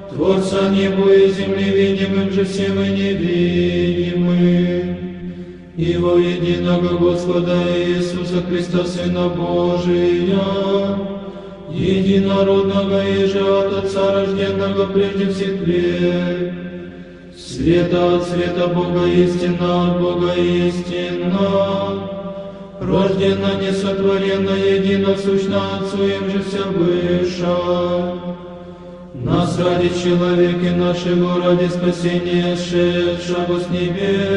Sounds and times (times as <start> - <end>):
Chant: 0.0 - 34.3.